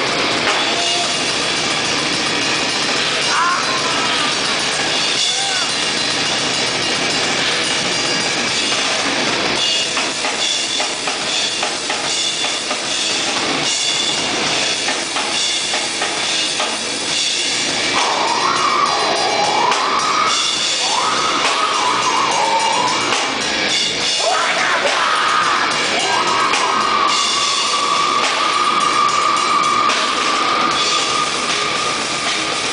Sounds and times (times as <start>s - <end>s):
Music: 0.0s - 32.7s.